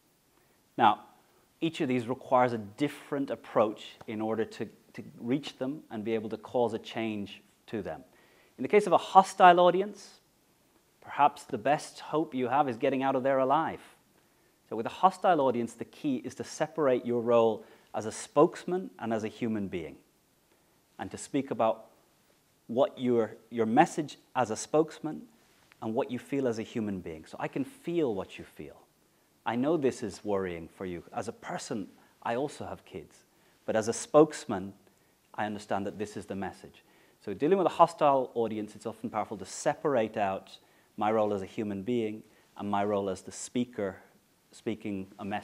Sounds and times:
Narration, monologue: 0.0 - 45.4
Male speech, man speaking: 0.8 - 10.2, 11.0 - 14.0, 14.7 - 20.0, 21.0 - 21.9, 22.7 - 28.9, 29.5 - 34.8, 35.4 - 45.4.

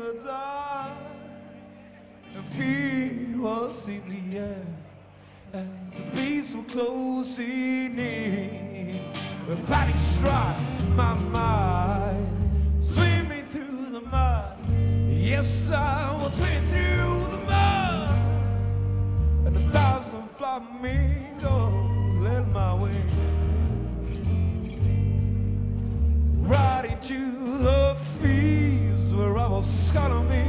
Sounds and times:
Music: 0.0 - 30.4.

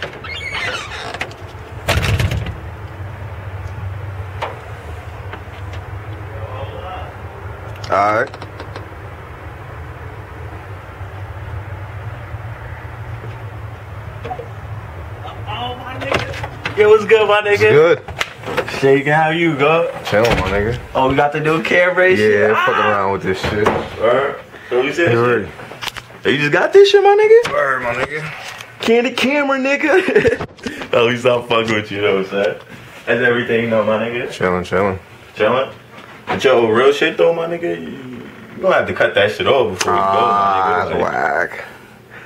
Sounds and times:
Inside, small room: 0.0 - 42.2.

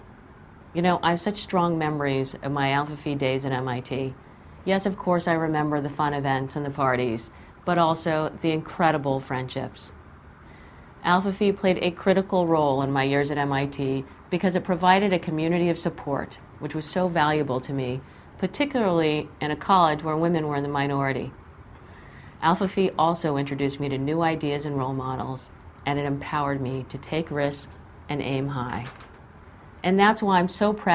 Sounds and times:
Narration, monologue: 0.0 - 30.9
Female speech, woman speaking: 0.8 - 10.0, 11.0 - 21.4, 22.4 - 29.0, 29.8 - 30.9.

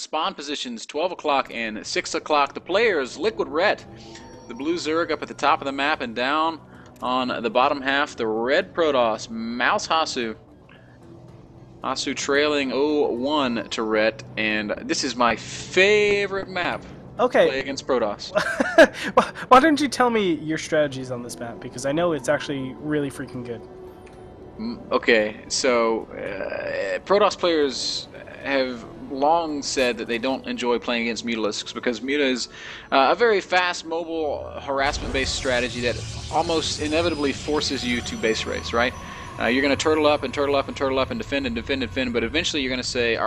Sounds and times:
Speech: 0.0 - 3.8, 4.5 - 10.4, 11.8 - 18.4, 19.2 - 23.6, 24.6 - 43.2
Music: 0.0 - 43.2.

